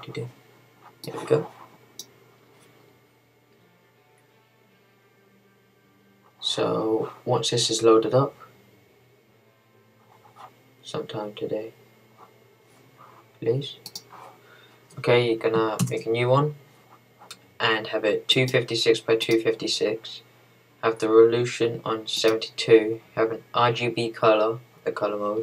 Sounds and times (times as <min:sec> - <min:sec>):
Speech: 0:00.0 - 0:00.4, 0:01.0 - 0:01.6, 0:06.4 - 0:08.5, 0:10.8 - 0:11.8, 0:13.4 - 0:13.8, 0:15.0 - 0:16.6, 0:17.6 - 0:25.4.